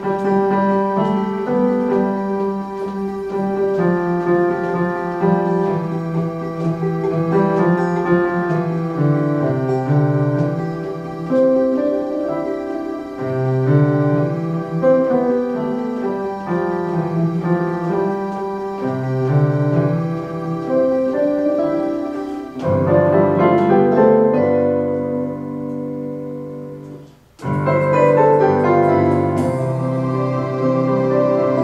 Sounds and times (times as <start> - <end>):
Tender music: 0.0 - 31.6.